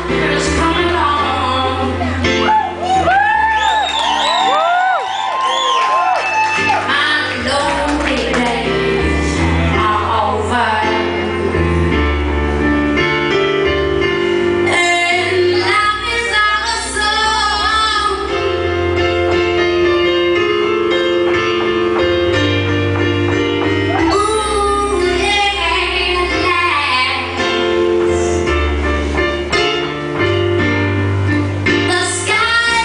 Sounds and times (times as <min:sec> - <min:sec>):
Female singing: 0:00.0 - 0:02.0, 0:06.9 - 0:11.4, 0:14.7 - 0:18.5, 0:24.1 - 0:27.4, 0:31.9 - 0:32.8
Music: 0:00.0 - 0:32.8.